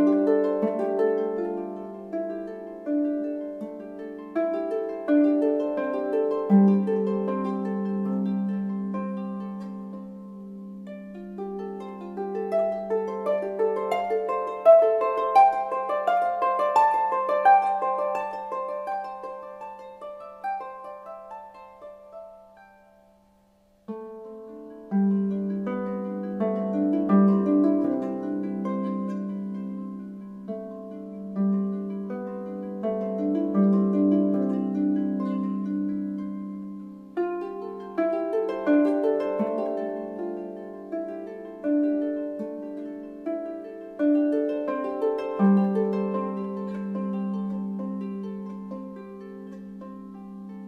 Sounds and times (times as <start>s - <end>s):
Harp: 0.0s - 50.6s.